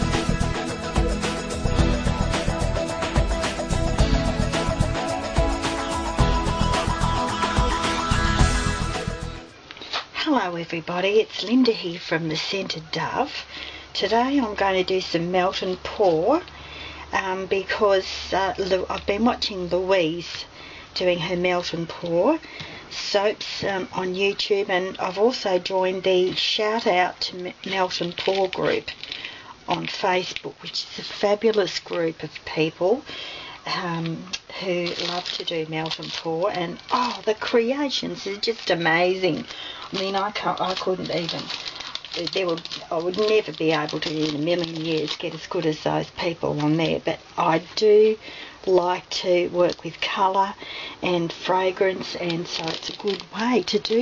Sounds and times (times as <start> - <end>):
Music: 0.0 - 9.6, 34.8 - 45.1
Speech: 10.1 - 16.5, 17.1 - 29.0, 29.7 - 33.0, 33.6 - 54.0.